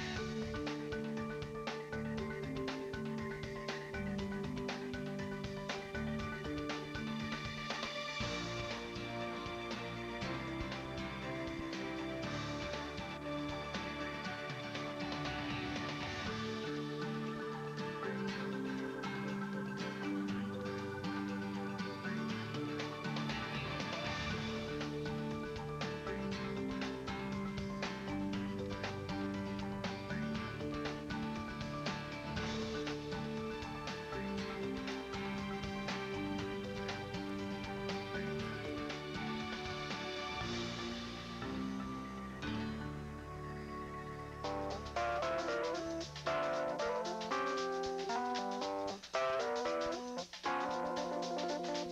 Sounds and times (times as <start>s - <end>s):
Music: 0.0s - 51.9s.